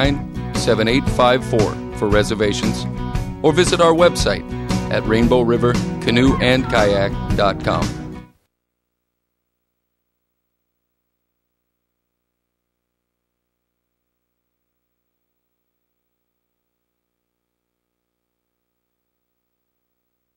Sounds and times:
Speech: 0.0s - 8.0s.

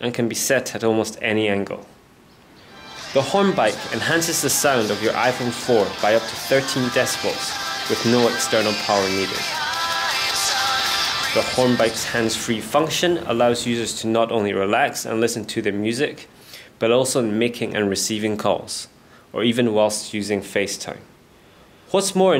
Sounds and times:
Speech: 0.0s - 1.9s, 3.2s - 9.5s, 11.4s - 21.1s, 21.9s - 22.3s
Music: 2.6s - 12.9s.

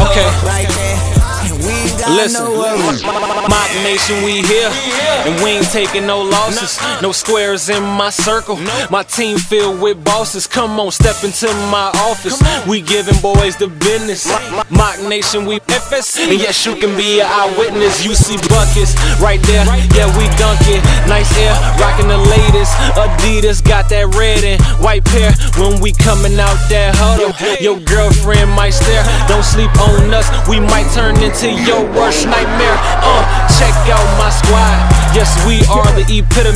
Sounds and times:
Music: 0.0s - 36.5s
Rapping: 0.0s - 36.5s.

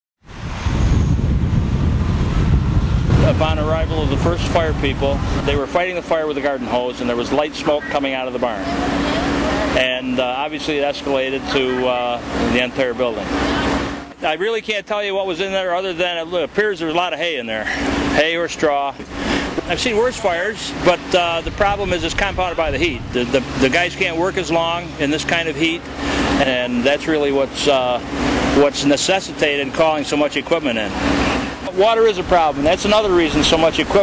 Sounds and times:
Fire: 0.2s - 34.0s
Outside, urban or manmade: 0.2s - 34.0s
Vehicle: 0.2s - 34.0s
Speech: 3.2s - 13.3s, 14.2s - 19.0s, 19.6s - 25.8s, 26.4s - 28.0s, 28.6s - 30.9s, 31.6s - 34.0s.

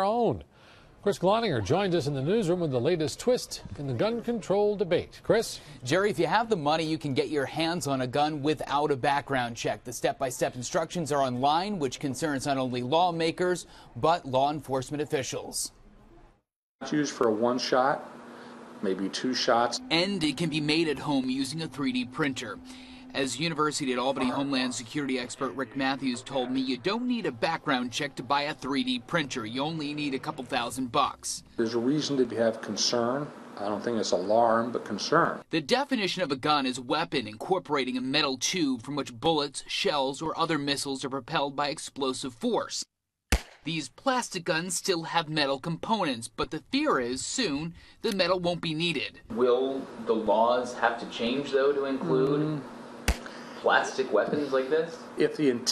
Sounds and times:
Speech: 16.8s - 18.0s, 18.8s - 22.6s, 23.2s - 42.8s, 43.7s - 52.6s, 53.6s - 55.7s.

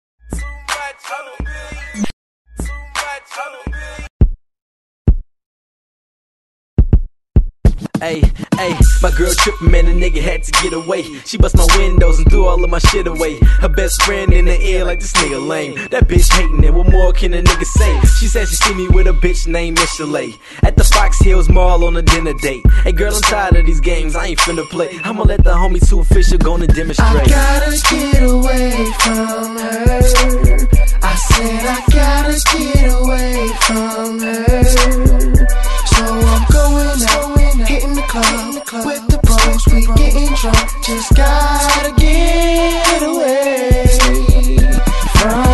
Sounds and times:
Rhythm and blues: 0.3s - 4.1s, 7.6s - 45.5s.

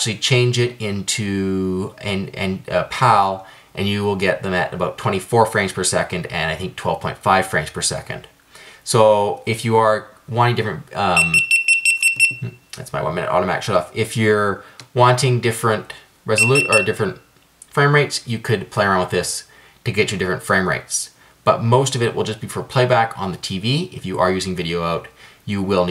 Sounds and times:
Speech: 0.0s - 11.4s, 12.4s - 25.9s.

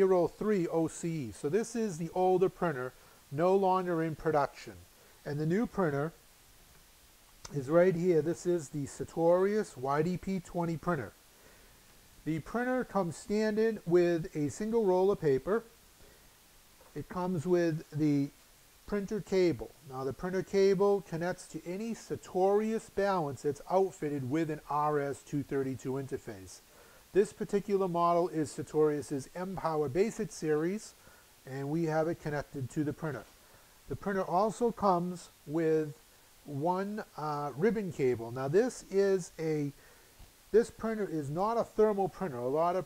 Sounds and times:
Speech: 0.0s - 6.2s, 7.5s - 11.2s, 12.2s - 15.8s, 16.9s - 33.3s, 33.9s - 39.8s, 40.5s - 42.8s.

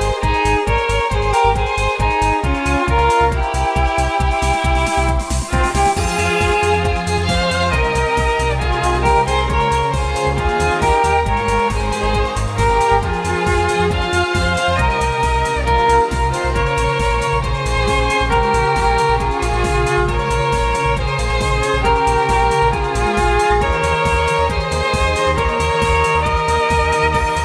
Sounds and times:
Violin, fiddle: 0.0s - 27.4s.

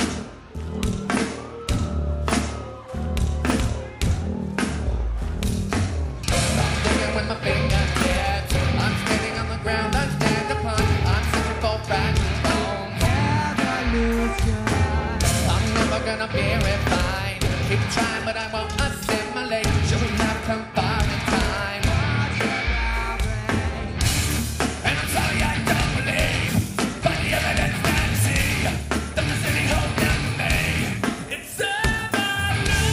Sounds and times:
Music: 0.0s - 32.9s.

